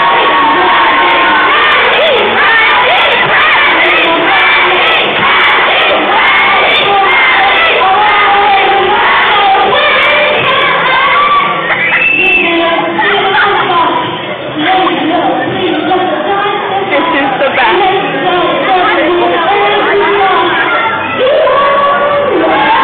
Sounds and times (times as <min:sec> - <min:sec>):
Inside, large room or hall: 0:00.0 - 0:22.8
Singing: 0:00.0 - 0:22.8
Speech: 0:12.4 - 0:22.8.